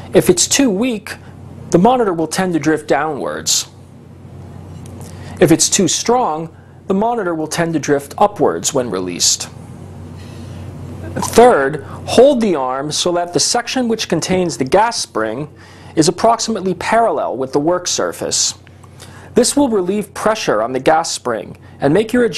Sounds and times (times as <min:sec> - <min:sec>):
Speech: 0:00.1 - 0:03.8, 0:05.4 - 0:09.6, 0:11.1 - 0:18.6, 0:19.4 - 0:22.3.